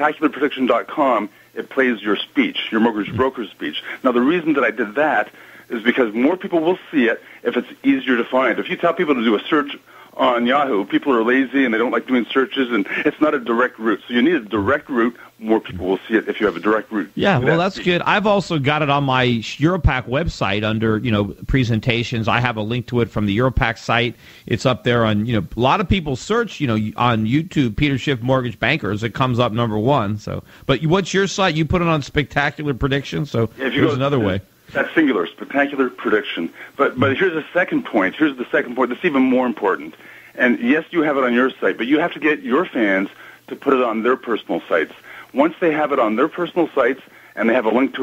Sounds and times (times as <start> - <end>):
Speech: 0.0 - 48.0.